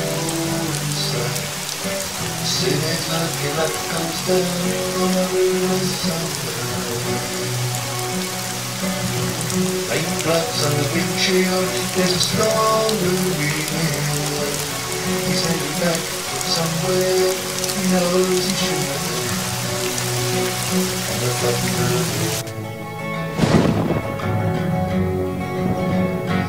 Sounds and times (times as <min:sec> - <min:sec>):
Acoustic guitar: 0:00.0 - 0:26.4.